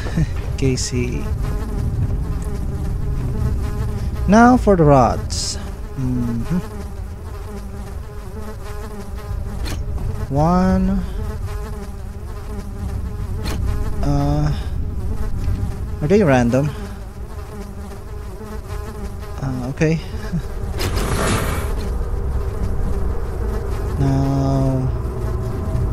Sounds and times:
Bee, wasp, etc.: 0:00.0 - 0:25.9
Fly, housefly: 0:00.0 - 0:25.9.

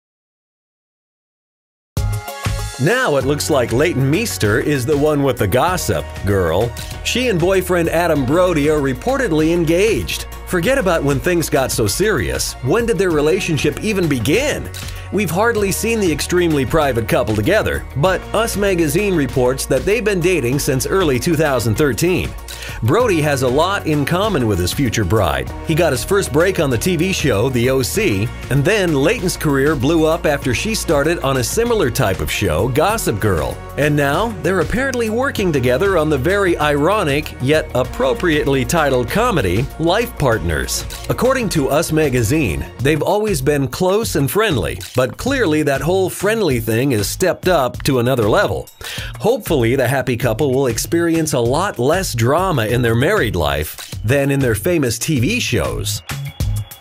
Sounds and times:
Music: 0:02.0 - 0:56.8
Speech: 0:02.8 - 0:56.0.

